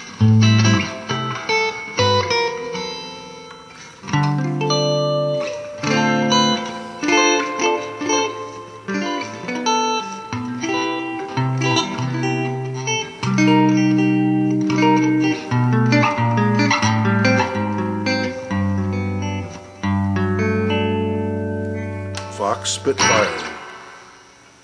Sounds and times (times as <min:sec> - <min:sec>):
Electric guitar: 0:00.0 - 0:24.6.